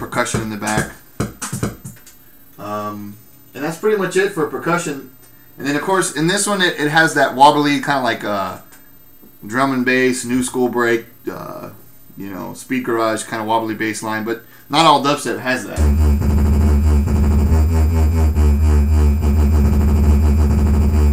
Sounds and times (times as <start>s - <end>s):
Speech: 0.0s - 1.0s, 2.6s - 8.7s, 9.4s - 15.8s
Dubstep: 15.8s - 21.1s.